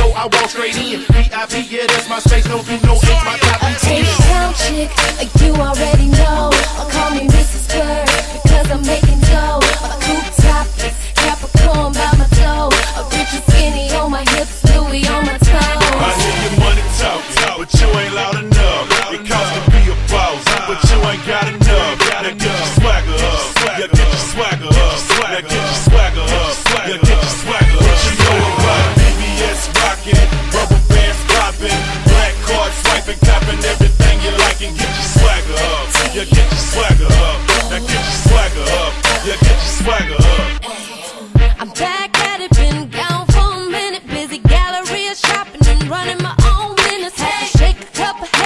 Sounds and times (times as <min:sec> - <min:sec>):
Music: 0:00.0 - 0:48.4.